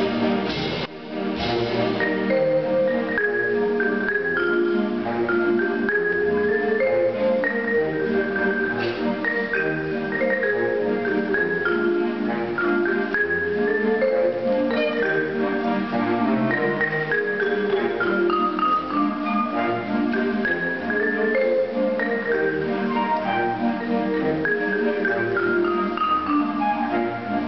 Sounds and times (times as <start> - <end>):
Marimba, xylophone: 0.0 - 27.4
Glockenspiel: 1.8 - 27.4.